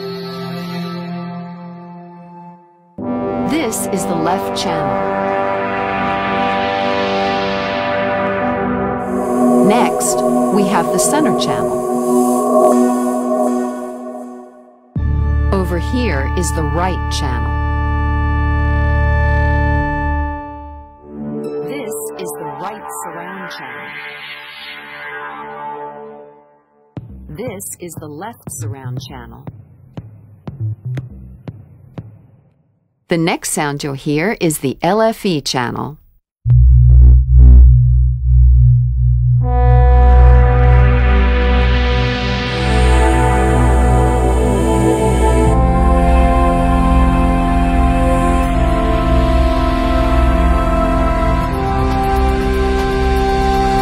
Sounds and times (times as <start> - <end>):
Music: 0.0 - 33.0, 36.8 - 53.8
Speech: 3.4 - 5.2, 9.6 - 11.7, 15.5 - 17.6, 21.6 - 23.9, 27.3 - 29.5, 33.1 - 36.0
Sound effect: 7.0 - 15.0, 21.1 - 26.6.